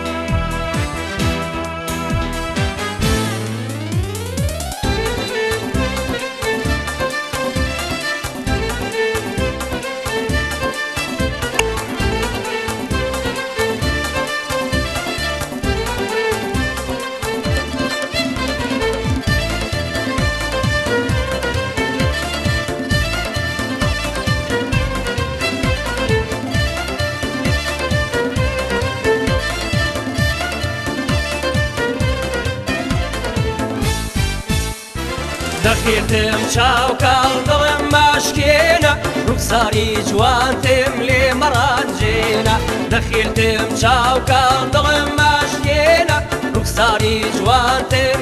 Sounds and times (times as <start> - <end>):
Music: 0.0 - 48.2.